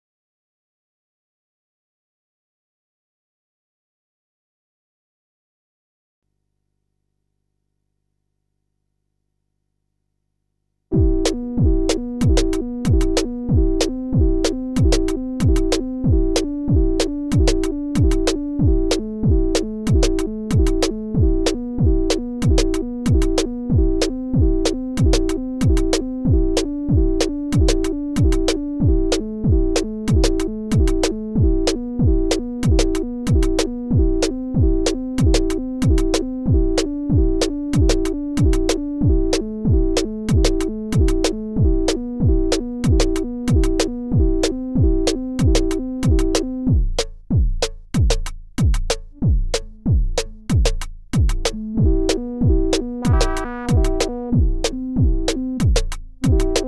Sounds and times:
Music: 0:10.9 - 0:56.6.

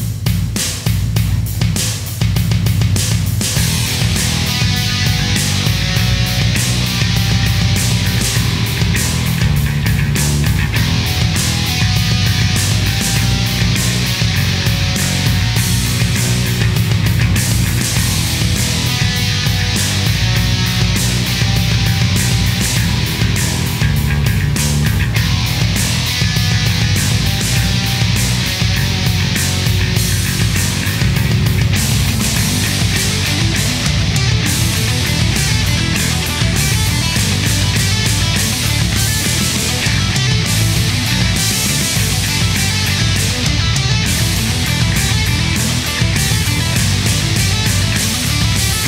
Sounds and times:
Grunge: 0:00.0 - 0:48.8.

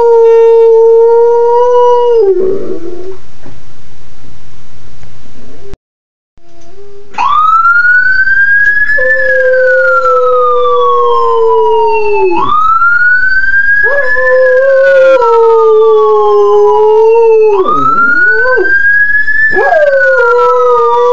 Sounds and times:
Police car (siren): 0:07.2 - 0:15.1, 0:16.0 - 0:21.1.

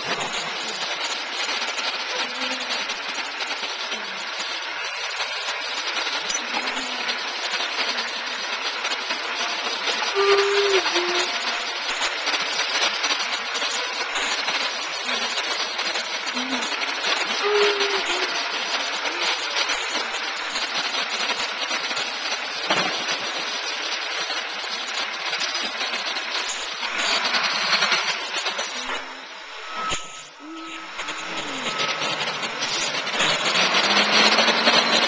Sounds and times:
Vehicle: 0:00.0 - 0:35.0.

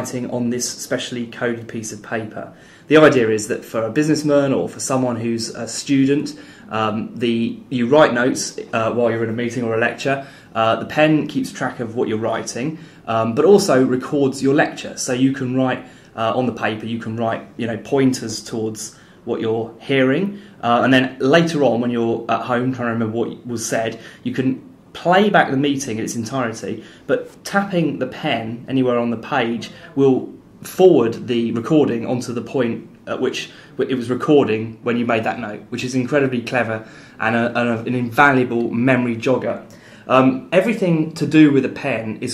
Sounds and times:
Speech: 0:00.0 - 0:42.3.

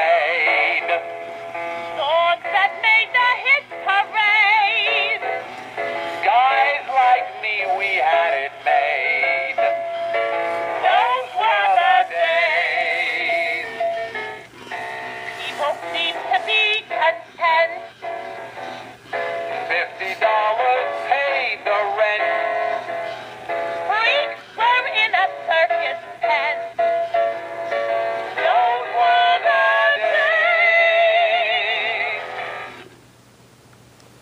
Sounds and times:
Music: 0:00.0 - 0:33.0
Female singing: 0:15.5 - 0:17.9, 0:23.9 - 0:26.7, 0:28.4 - 0:32.2.

